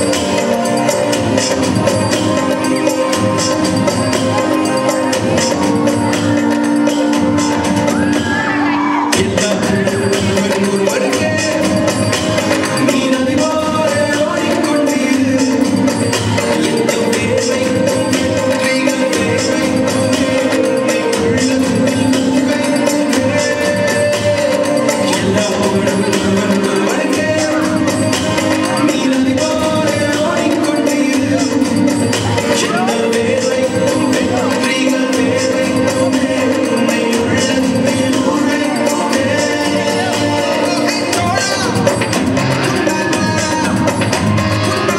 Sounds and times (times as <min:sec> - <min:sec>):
Jingle (music): 0:00.0 - 0:44.9.